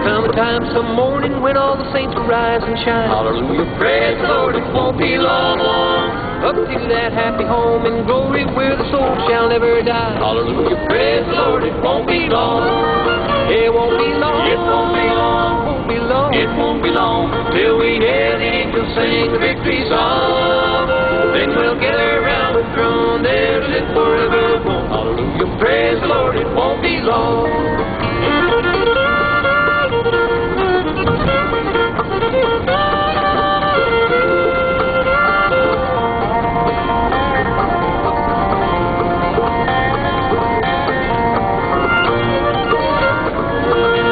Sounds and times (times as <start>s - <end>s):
Bluegrass: 0.0s - 44.1s.